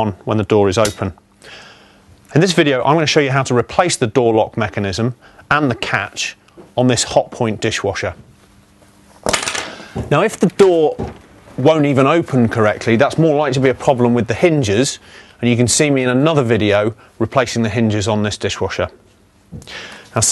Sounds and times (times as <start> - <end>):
Speech: 0.0 - 1.2, 2.3 - 8.2, 10.1 - 19.0.